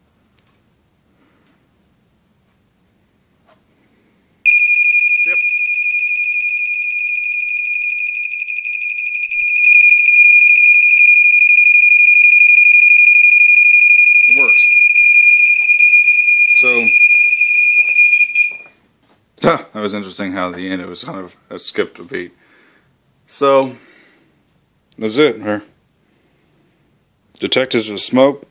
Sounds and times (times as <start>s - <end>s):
Smoke detector, smoke alarm: 4.5s - 18.7s.